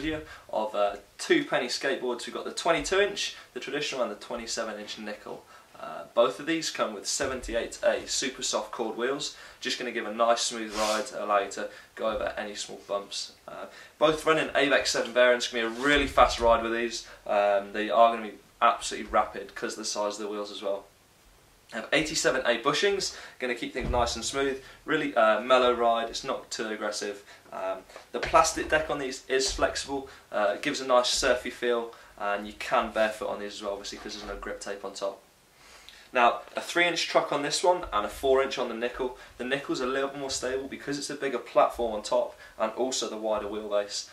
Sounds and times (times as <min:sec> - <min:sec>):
Speech: 0:00.0 - 0:20.9, 0:21.7 - 0:35.2, 0:36.1 - 0:44.1.